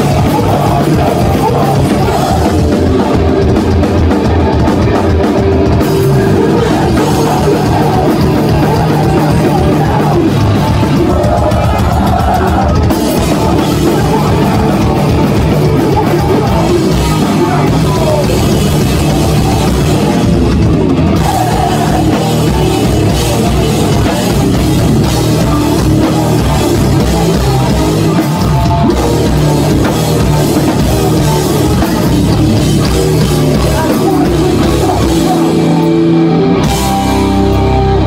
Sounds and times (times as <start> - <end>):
Singing: 0.0 - 20.3, 21.1 - 35.9
Music: 0.0 - 38.0.